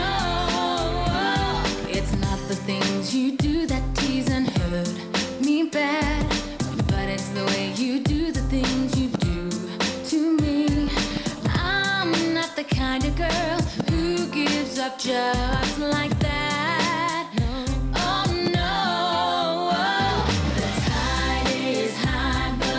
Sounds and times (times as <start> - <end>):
Singing: 0.0 - 6.1, 10.1 - 22.7.